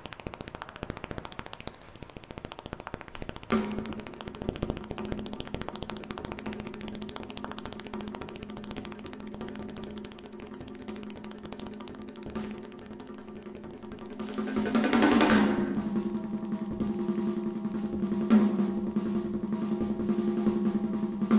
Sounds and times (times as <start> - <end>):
Wood block: 0.0 - 20.5.